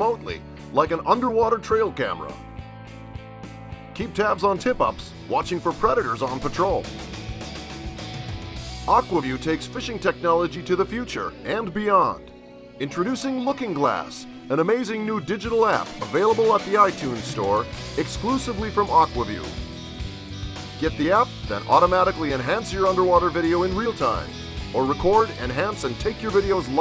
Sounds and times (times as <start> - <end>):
Speech: 0.0 - 2.4, 4.0 - 6.8, 8.9 - 12.2, 12.8 - 19.5, 20.8 - 26.8
Music: 0.0 - 26.8.